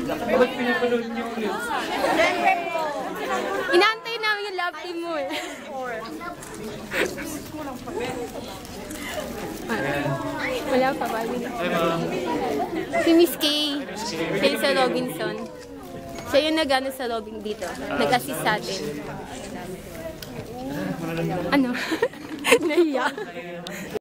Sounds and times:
Conversation: 0.0s - 24.0s
Male speech, man speaking: 0.2s - 1.8s, 20.7s - 21.5s
Female speech, woman speaking: 2.1s - 6.3s, 10.2s - 11.8s, 12.9s - 15.5s, 16.3s - 18.9s, 22.5s - 23.3s.

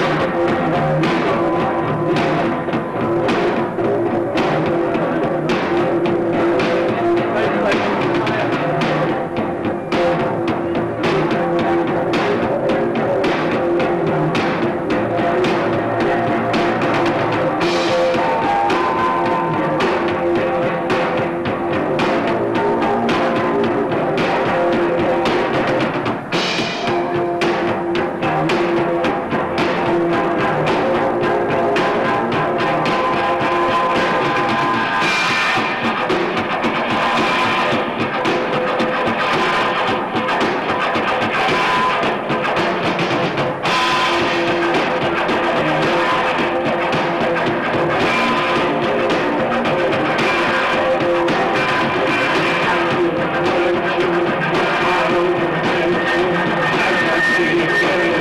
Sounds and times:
Music: 0.0s - 58.2s.

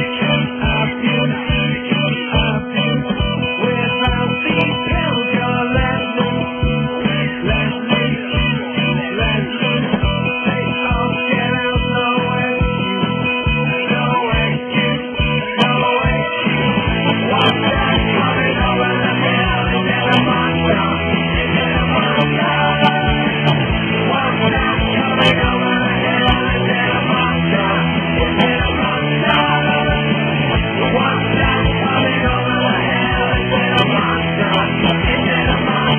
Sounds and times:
Music: 0.0s - 35.9s.

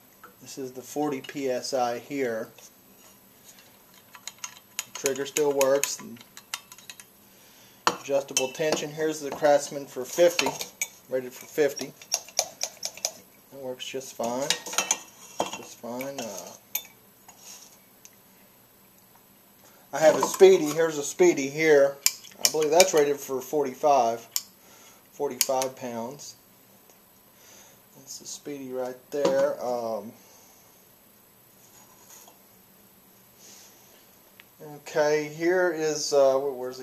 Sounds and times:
Speech: 0.4s - 2.6s, 5.0s - 6.2s, 8.0s - 12.0s, 13.5s - 14.7s, 15.6s - 16.6s, 19.9s - 24.3s, 25.2s - 26.4s, 28.0s - 30.2s, 34.6s - 36.8s.

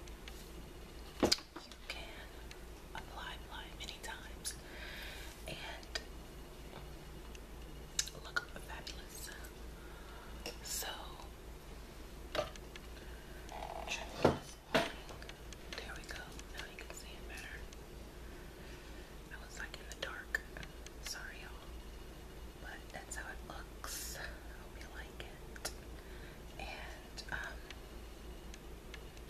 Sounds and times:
Inside, small room: 0.0s - 29.3s
Whispering: 1.6s - 4.6s, 5.5s - 6.1s, 8.0s - 9.5s, 10.5s - 11.4s, 13.7s - 14.6s, 15.8s - 17.8s, 19.3s - 21.8s, 22.6s - 25.8s, 26.6s - 27.8s.

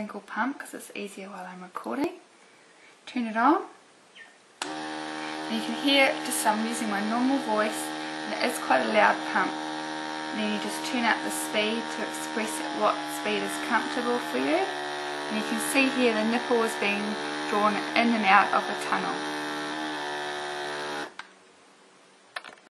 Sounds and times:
Speech: 0.0s - 2.2s, 3.1s - 3.8s, 5.5s - 9.5s, 10.4s - 14.7s, 15.3s - 19.2s.

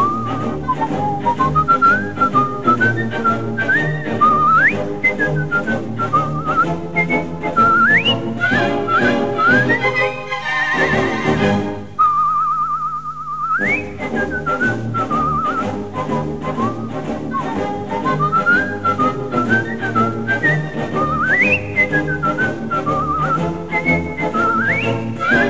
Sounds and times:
Whistling: 0.0s - 10.1s, 12.0s - 25.4s.

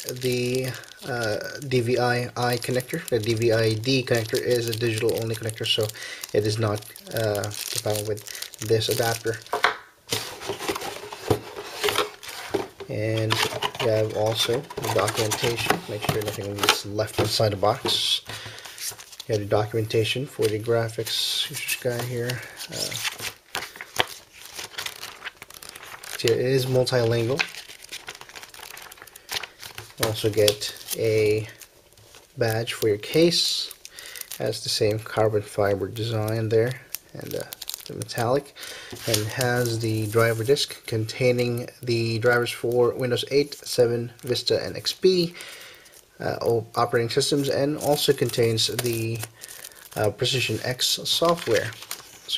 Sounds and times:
Speech: 0.0s - 9.5s, 12.9s - 18.3s, 19.3s - 23.0s, 26.2s - 27.5s, 30.0s - 31.6s, 32.4s - 33.8s, 34.4s - 38.5s, 39.1s - 45.4s, 46.2s - 49.3s, 50.0s - 52.3s
Inside, small room: 0.0s - 52.3s.

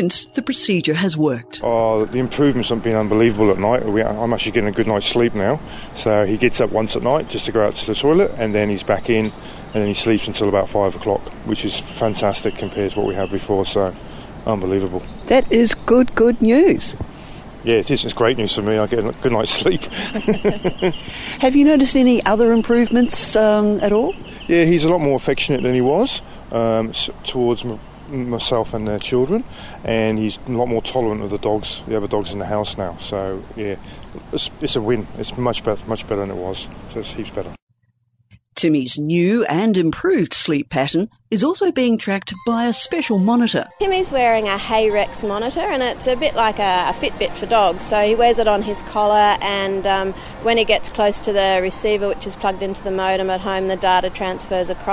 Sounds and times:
Speech: 0.0s - 13.9s, 21.4s - 37.6s.

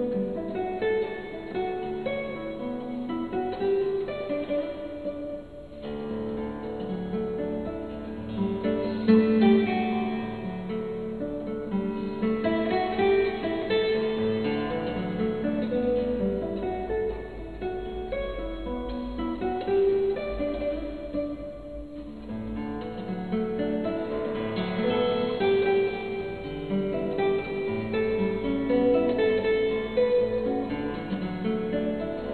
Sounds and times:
Acoustic guitar: 0.0s - 32.3s.

